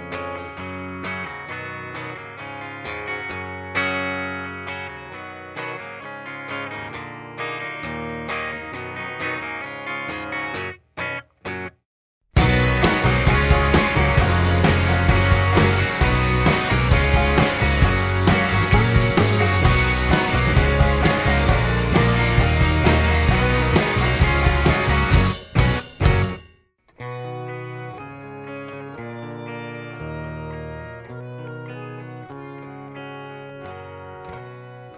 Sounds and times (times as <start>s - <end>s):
Music: 0.0s - 34.9s.